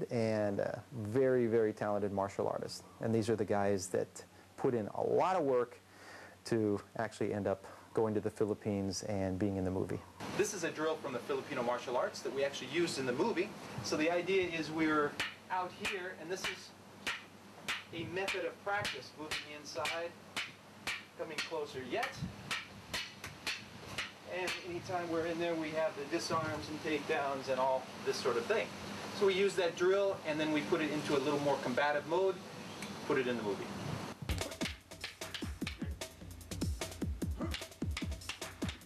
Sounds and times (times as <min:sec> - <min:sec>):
Speech: 0:00.0 - 0:05.8, 0:06.4 - 0:16.8, 0:18.0 - 0:20.2, 0:21.2 - 0:22.3, 0:24.3 - 0:32.4, 0:33.0 - 0:33.8.